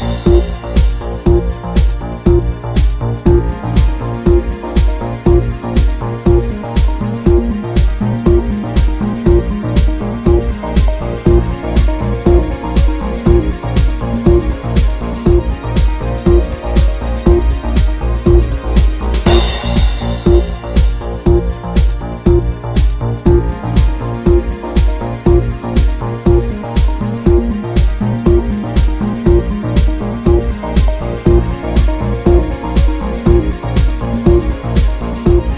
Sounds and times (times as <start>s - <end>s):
Music: 0.0s - 35.5s.